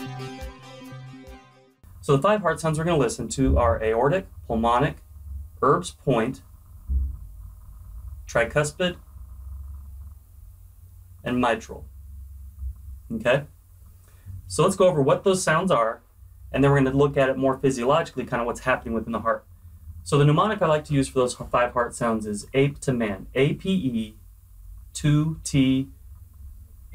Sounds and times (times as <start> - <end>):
Speech: 2.1 - 5.0, 5.6 - 6.4, 8.3 - 9.0, 11.3 - 11.8, 13.1 - 13.5, 14.5 - 16.0, 16.6 - 19.4, 20.1 - 24.2, 25.0 - 25.9.